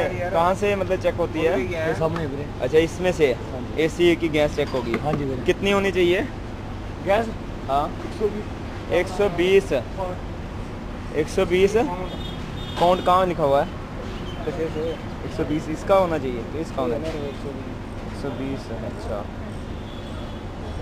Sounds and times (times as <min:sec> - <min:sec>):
Speech: 0:14.4 - 0:19.3.